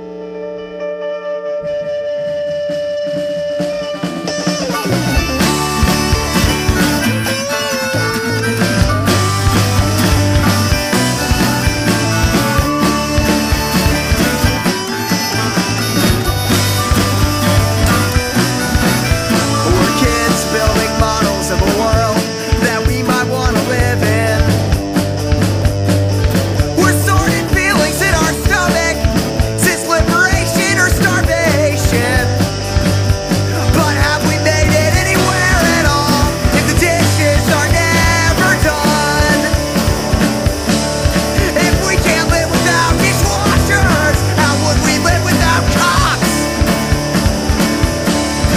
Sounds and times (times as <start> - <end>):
Music: 0.0 - 48.5.